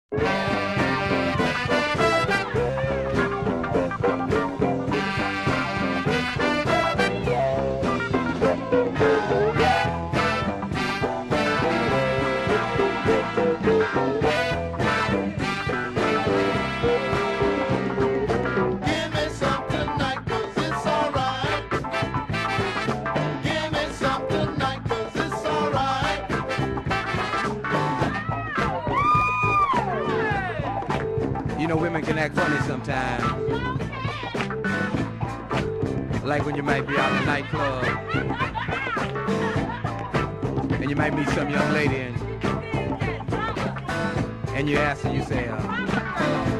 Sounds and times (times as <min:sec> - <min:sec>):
Swing music: 0:00.1 - 0:46.5.